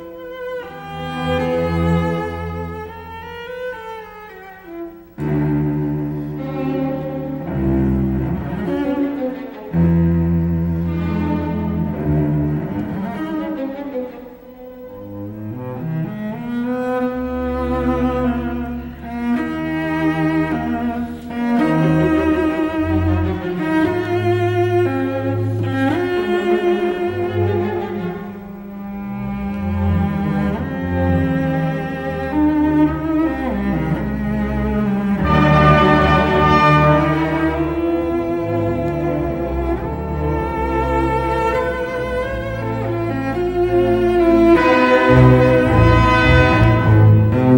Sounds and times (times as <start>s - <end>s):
Double bass: 0.0s - 14.1s, 14.8s - 47.5s
Cello: 0.0s - 47.5s.